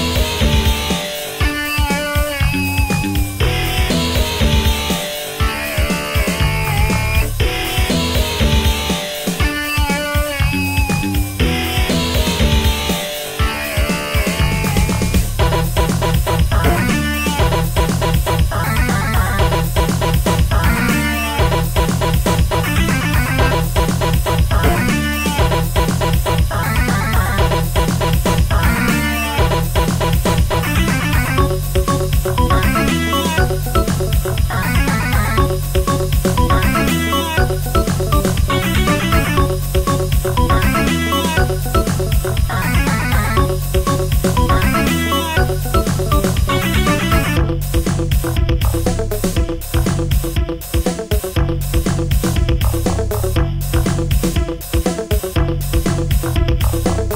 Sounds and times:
Music: 0:00.0 - 0:57.1.

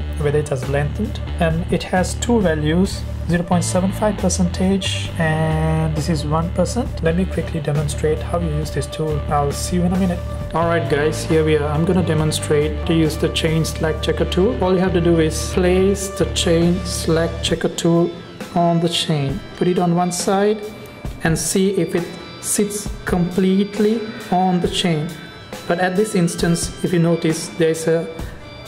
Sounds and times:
Music: 0:00.0 - 0:28.6
Speech: 0:00.0 - 0:28.6.

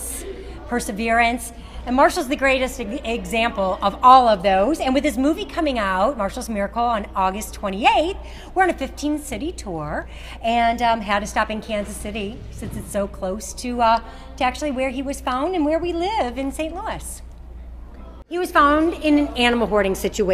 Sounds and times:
Speech: 0:00.0 - 0:17.3, 0:17.9 - 0:20.3.

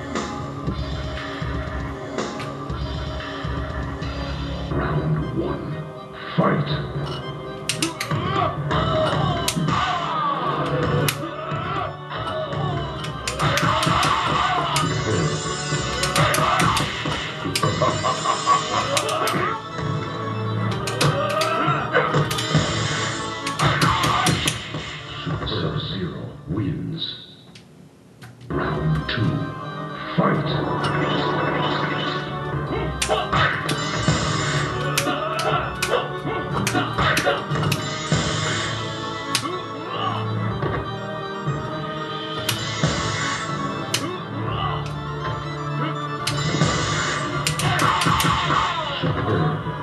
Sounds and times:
Music: 0:00.0 - 0:49.8.

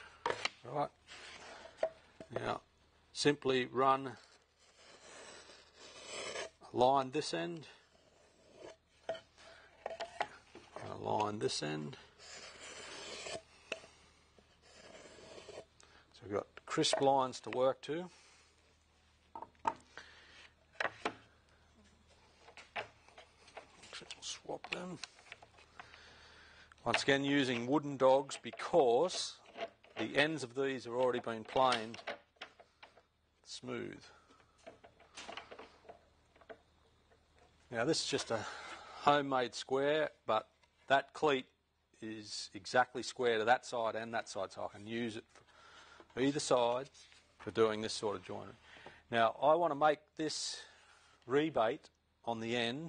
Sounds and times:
Speech: 0:00.6 - 0:01.0, 0:02.3 - 0:04.2, 0:06.7 - 0:07.8, 0:10.8 - 0:12.0, 0:16.2 - 0:18.2, 0:23.9 - 0:25.1, 0:26.8 - 0:29.4, 0:30.0 - 0:32.0, 0:33.5 - 0:34.1, 0:37.7 - 0:45.3, 0:46.2 - 0:50.7, 0:51.3 - 0:52.8.

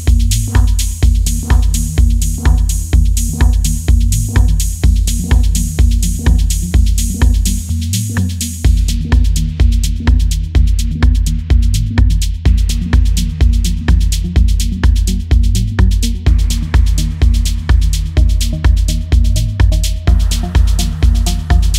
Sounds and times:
Music: 0:00.0 - 0:21.7.

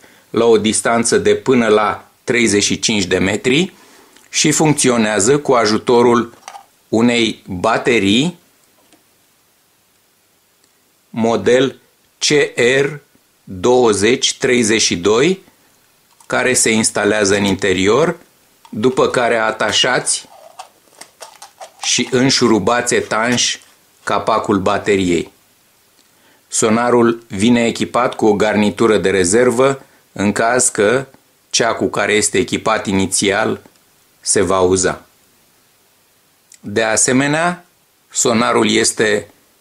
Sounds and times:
Speech: 0:00.3 - 0:08.4, 0:11.1 - 0:15.5, 0:16.3 - 0:20.3, 0:21.8 - 0:25.4, 0:26.5 - 0:35.1, 0:36.5 - 0:39.4.

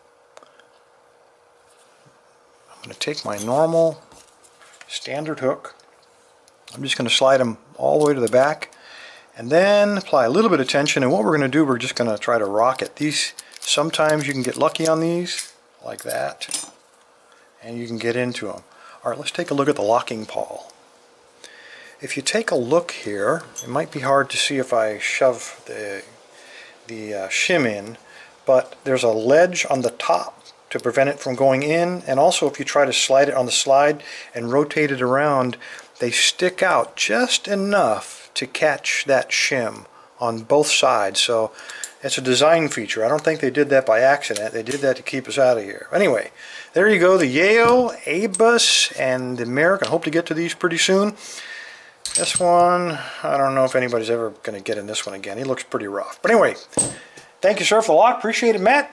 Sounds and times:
Speech: 0:02.7 - 0:04.1, 0:04.9 - 0:05.8, 0:06.7 - 0:08.7, 0:09.4 - 0:16.7, 0:17.6 - 0:20.8, 0:22.0 - 0:26.2, 0:26.9 - 0:51.2, 0:52.2 - 0:56.7, 0:57.4 - 0:58.9.

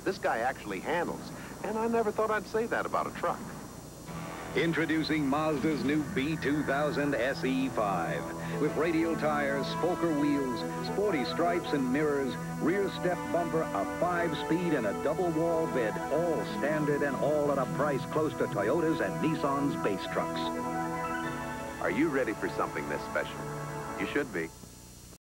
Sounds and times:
Speech: 0:00.0 - 0:03.6, 0:04.6 - 0:20.5, 0:21.8 - 0:23.4, 0:24.0 - 0:24.6
Music: 0:04.1 - 0:25.2.

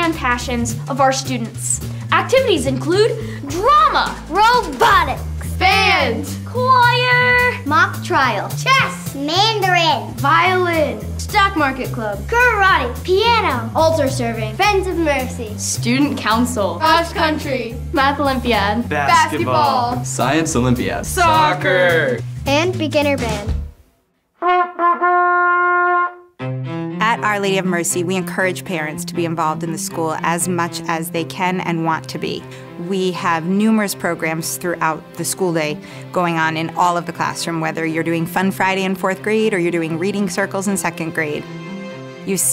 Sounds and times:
Music: 0:00.0 - 0:42.5.

